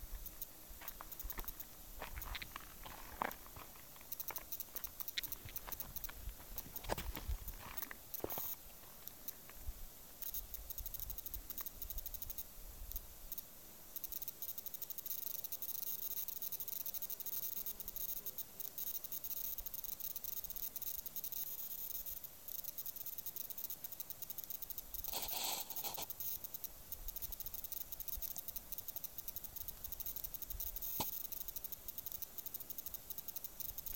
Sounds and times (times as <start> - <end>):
Walk, footsteps: 0.1 - 9.6.